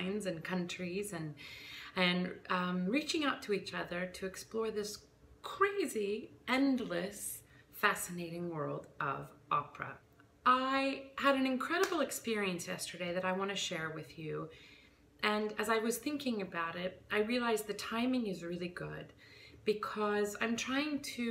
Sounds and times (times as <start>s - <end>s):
Speech: 0.0s - 1.4s, 2.0s - 14.5s, 15.2s - 19.1s, 19.7s - 21.3s.